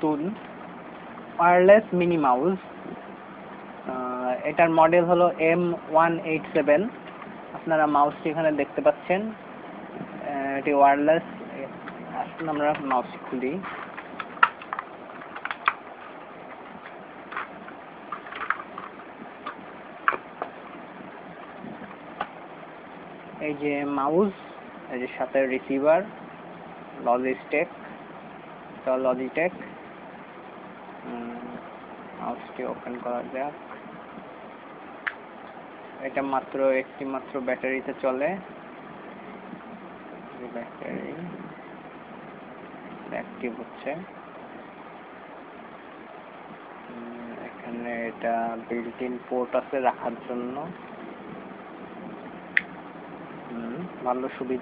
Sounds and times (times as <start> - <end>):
Speech: 0.0 - 0.4, 1.4 - 2.7, 3.9 - 7.0, 7.6 - 9.4, 10.2 - 13.7, 23.4 - 26.2, 27.0 - 27.8, 28.9 - 29.7, 32.2 - 33.6, 36.0 - 38.5, 40.4 - 41.5, 43.1 - 44.2, 46.9 - 50.8, 53.5 - 54.6.